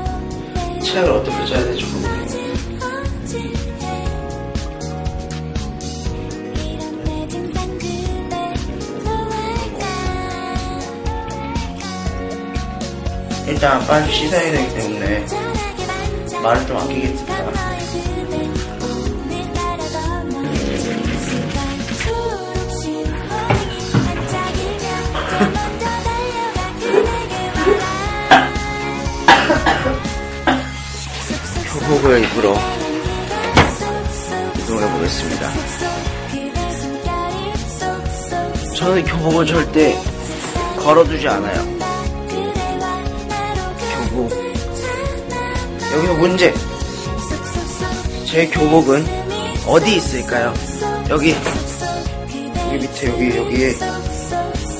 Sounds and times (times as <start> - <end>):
Music: 0.0 - 54.7
Speech: 0.8 - 2.2, 13.5 - 15.4, 16.4 - 17.6, 31.6 - 32.8, 34.6 - 35.7, 38.8 - 40.0, 40.8 - 41.7, 45.9 - 46.6, 48.3 - 51.6, 52.6 - 54.0.